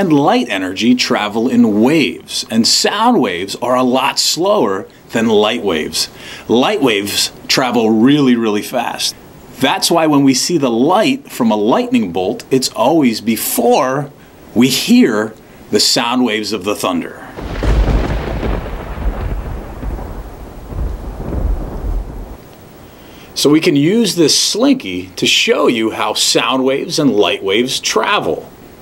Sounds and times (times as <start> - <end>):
Speech: 0.0 - 17.4, 23.4 - 28.6.